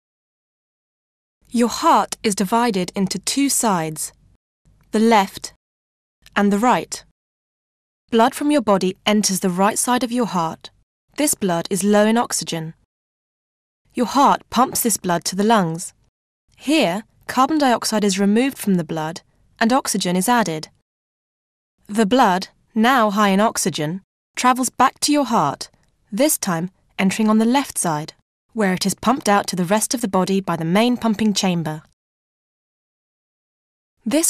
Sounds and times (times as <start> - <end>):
Speech: 1.5 - 4.2, 4.9 - 5.6, 6.3 - 7.1, 8.1 - 12.8, 14.0 - 16.0, 16.6 - 20.8, 21.9 - 32.0, 34.1 - 34.3.